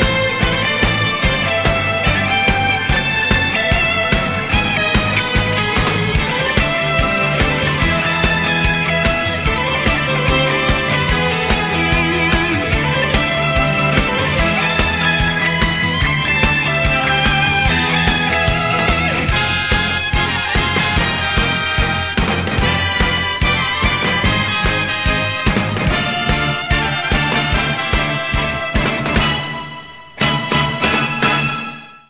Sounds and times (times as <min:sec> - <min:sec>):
Pop music: 0:00.0 - 0:31.8
Theme music: 0:00.0 - 0:32.0.